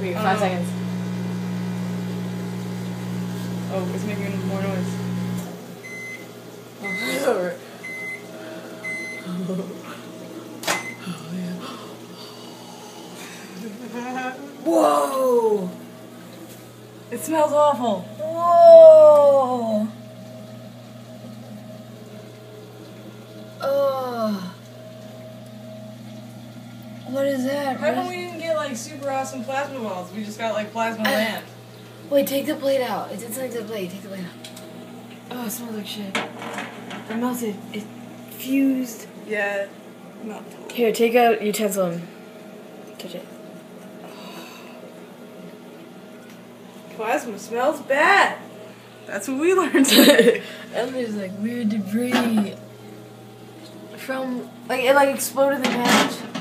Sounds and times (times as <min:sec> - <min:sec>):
Conversation: 0:00.0 - 0:56.4.